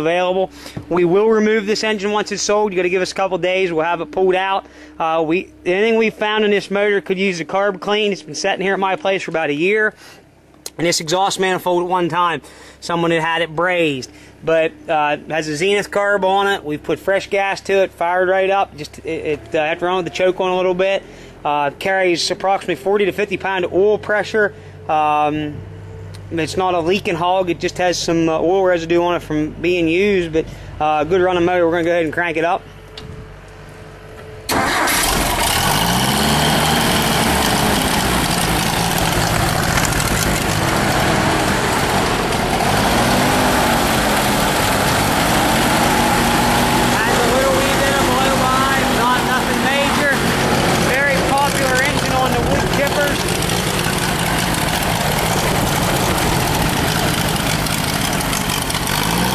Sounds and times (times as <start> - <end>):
Speech: 0.0 - 10.0, 10.7 - 25.6, 26.3 - 32.6, 46.9 - 53.2
Engine: 0.0 - 59.3.